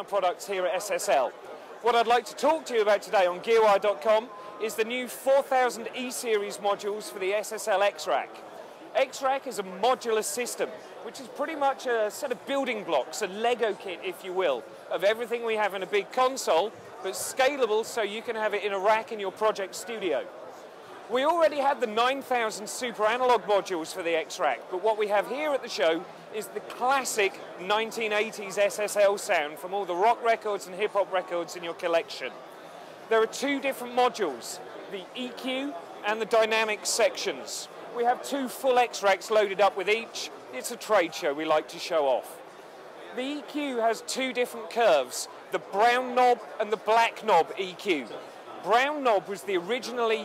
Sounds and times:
Speech: 0:00.0 - 0:32.4, 0:33.0 - 0:50.2.

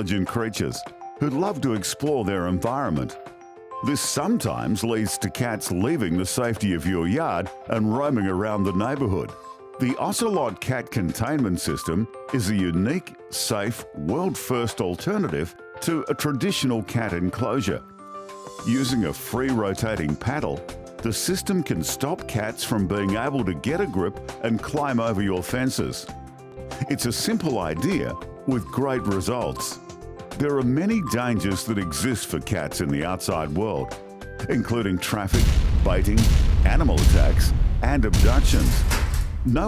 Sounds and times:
Speech: 0:00.0 - 0:03.2, 0:03.8 - 0:17.8, 0:18.6 - 0:26.1, 0:26.8 - 0:29.8, 0:30.4 - 0:38.9
Music: 0:00.0 - 0:39.6.

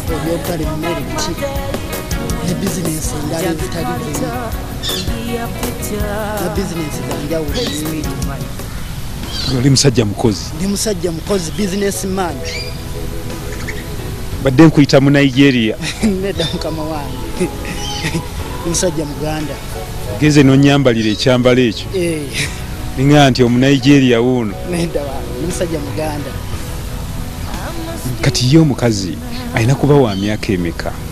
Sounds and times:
Speech: 0:00.0 - 0:01.4, 0:02.4 - 0:04.5, 0:06.4 - 0:08.5, 0:09.5 - 0:12.6, 0:14.5 - 0:26.4, 0:27.6 - 0:31.0
Music: 0:00.0 - 0:31.1.

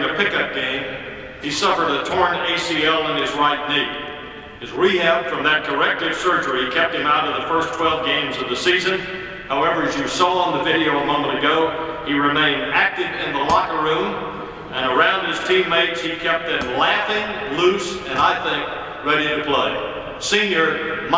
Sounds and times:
Male speech, man speaking: 0:00.0 - 0:04.0, 0:04.6 - 0:21.1
Narration, monologue: 0:00.0 - 0:21.1.

